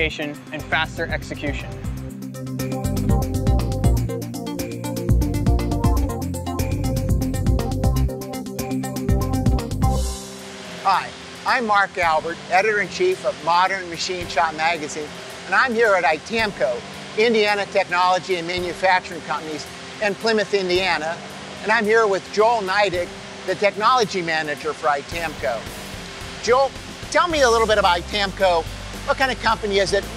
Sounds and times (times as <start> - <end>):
Speech: 0.0 - 1.8, 10.9 - 25.7, 26.4 - 30.1
Music: 0.0 - 30.1.